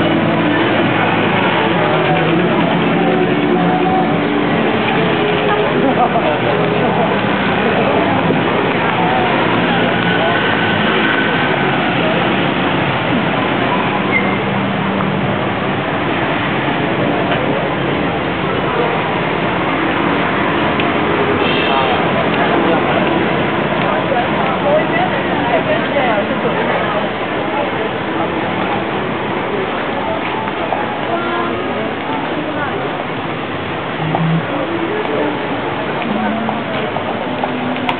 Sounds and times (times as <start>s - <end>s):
Speech: 0.0s - 14.7s, 16.8s - 37.9s.